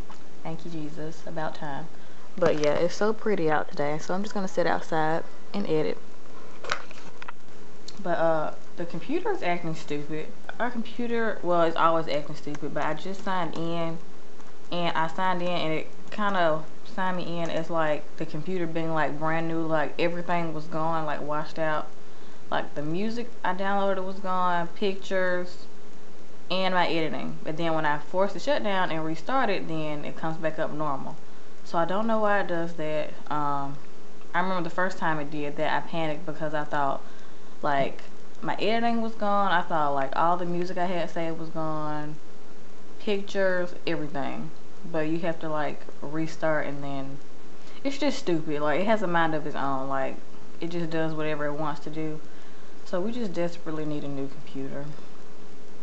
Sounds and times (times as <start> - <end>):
Speech: 0.4 - 6.0, 7.9 - 14.0, 14.7 - 21.9, 22.5 - 25.7, 26.5 - 42.2, 43.0 - 47.2, 47.8 - 52.2, 52.9 - 55.0.